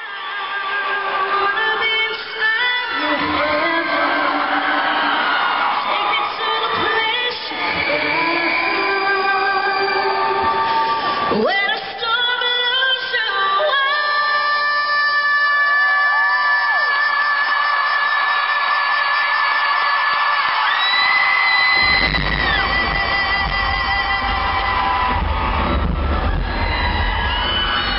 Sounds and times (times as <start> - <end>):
Singing: 0.0 - 25.4.